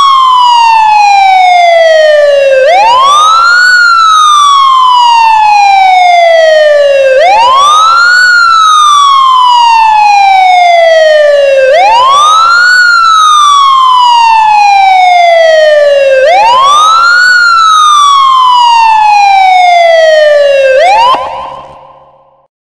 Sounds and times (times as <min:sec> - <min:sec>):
Police car (siren): 0:00.0 - 0:22.5.